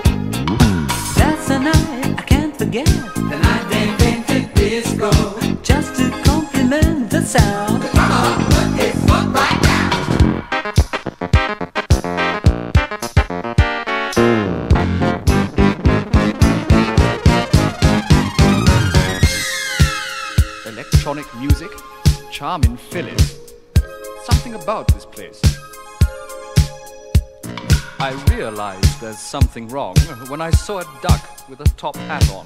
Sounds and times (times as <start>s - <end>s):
Music: 0.0s - 32.4s
Speech: 20.6s - 23.3s, 24.2s - 25.6s, 28.0s - 32.4s.